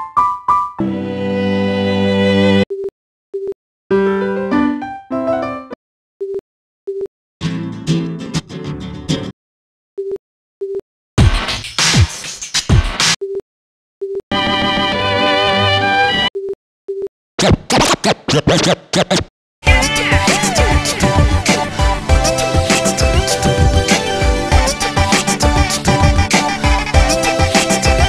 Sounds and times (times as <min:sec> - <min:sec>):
Music: 0:00.0 - 0:02.6, 0:03.9 - 0:05.8, 0:07.4 - 0:09.3, 0:11.2 - 0:13.1, 0:14.3 - 0:16.3, 0:19.6 - 0:28.0.